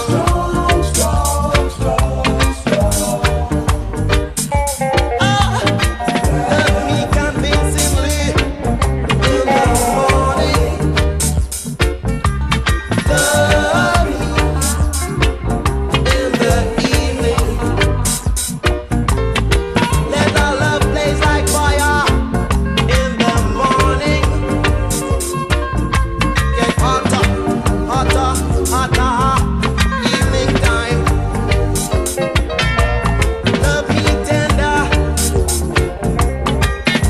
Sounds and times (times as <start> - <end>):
Music: 0.0 - 37.0.